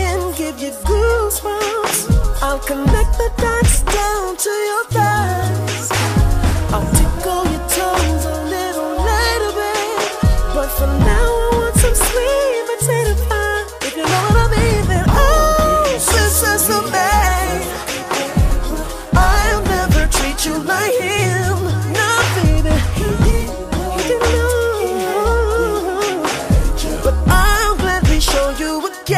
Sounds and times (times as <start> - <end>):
Hip hop music: 0.0 - 29.1.